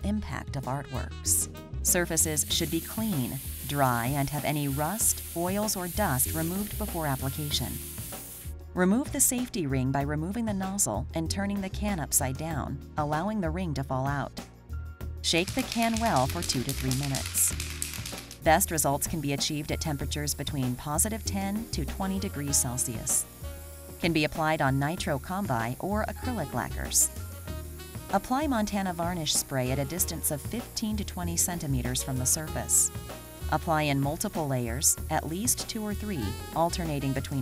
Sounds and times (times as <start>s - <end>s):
Speech: 0.0s - 7.8s, 8.8s - 14.4s, 15.2s - 17.6s, 18.5s - 23.2s, 24.0s - 27.1s, 28.2s - 32.9s, 33.5s - 37.4s
Music: 0.0s - 37.4s
Spray: 2.0s - 8.5s, 15.3s - 19.8s, 20.4s - 27.2s, 31.6s - 37.4s.